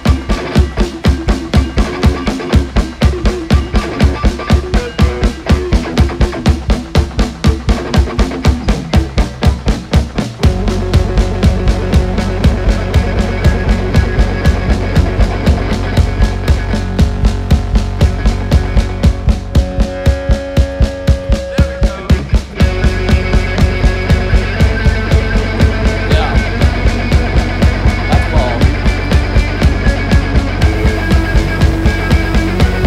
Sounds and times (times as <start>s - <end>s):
Music: 0.0s - 32.8s
Speech: 21.5s - 22.4s, 26.0s - 26.6s, 28.0s - 28.8s.